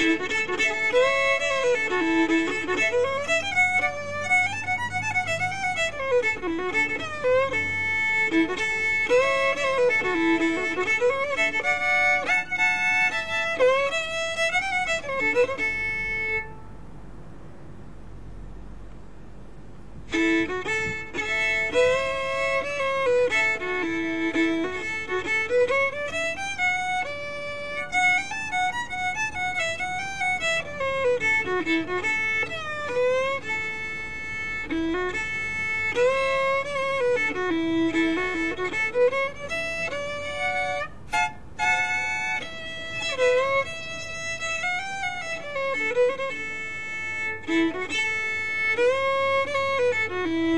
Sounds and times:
Bluegrass: 0:00.0 - 0:16.6, 0:20.0 - 0:50.5
Violin, fiddle: 0:00.0 - 0:16.9, 0:20.0 - 0:50.5.

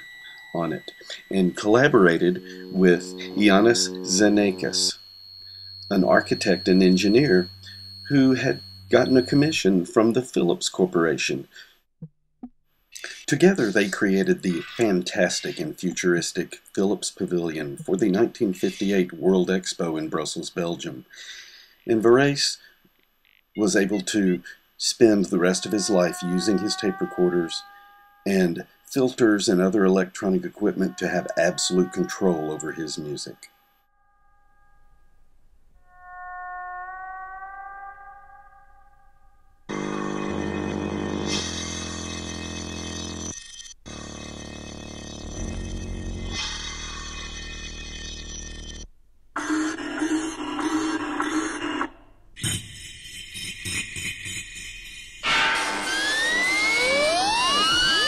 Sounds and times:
Electronic music: 0:00.0 - 0:09.7, 0:13.3 - 0:15.7, 0:55.2 - 0:58.0.

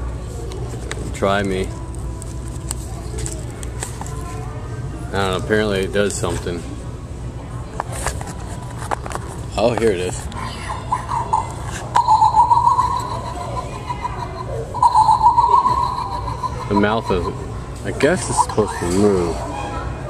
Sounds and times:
Inside, public space: 0:00.0 - 0:20.0.

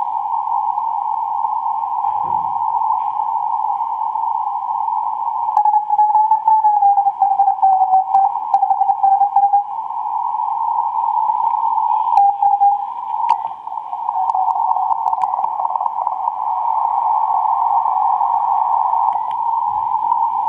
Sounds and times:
Radio: 0:00.0 - 0:20.4.

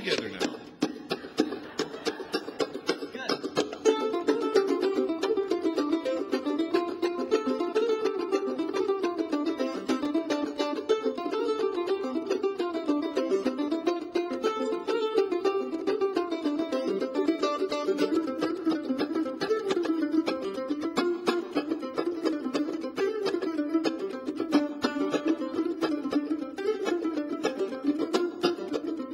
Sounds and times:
Mandolin: 0:00.0 - 0:29.1.

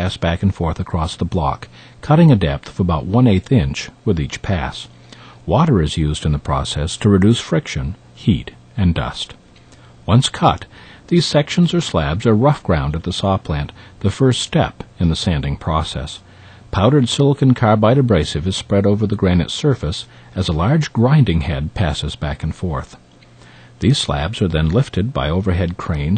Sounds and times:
Speech: 0:00.0 - 0:04.9, 0:05.5 - 0:09.4, 0:10.1 - 0:23.0, 0:23.8 - 0:26.1.

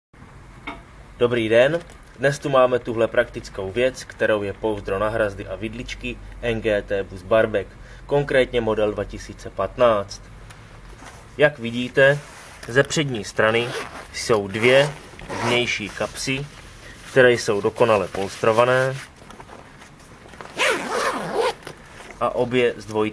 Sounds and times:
Speech: 0:01.2 - 0:10.3, 0:11.4 - 0:16.5, 0:17.1 - 0:19.1, 0:22.2 - 0:23.1.

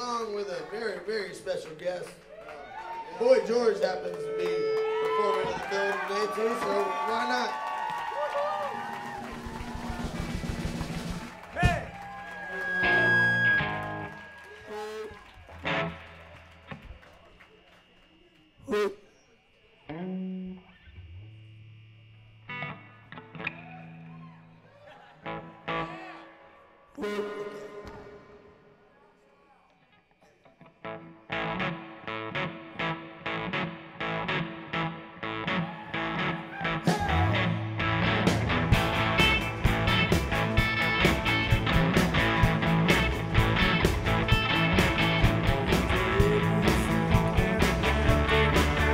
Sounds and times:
Music: 0:09.0 - 0:17.8, 0:19.9 - 0:21.6, 0:22.2 - 0:24.6, 0:25.2 - 0:26.4, 0:27.0 - 0:28.6, 0:30.7 - 0:48.9.

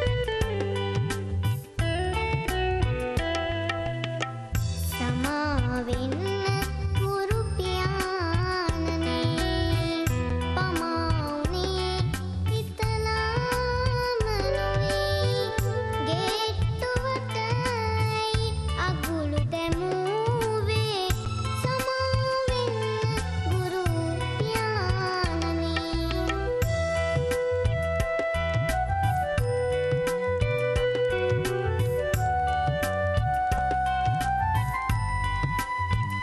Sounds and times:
Music: 0:00.0 - 0:36.2.

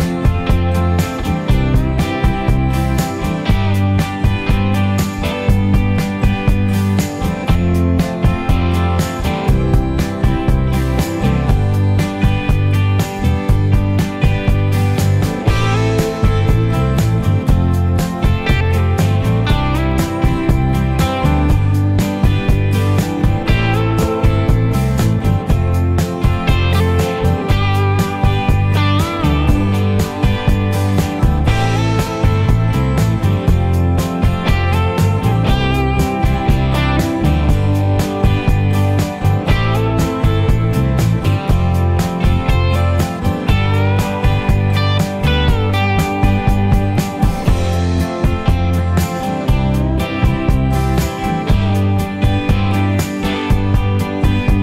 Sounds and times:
Music: 0:00.0 - 0:54.6.

